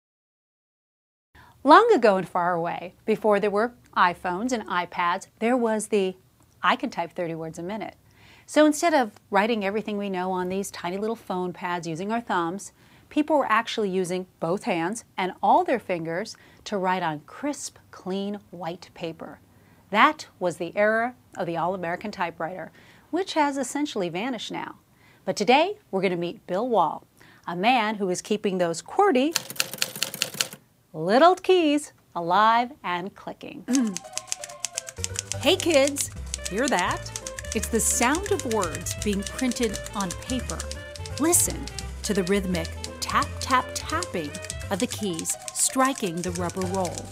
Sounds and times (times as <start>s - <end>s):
Speech: 1.6s - 29.4s, 31.0s - 33.9s, 35.4s - 47.1s.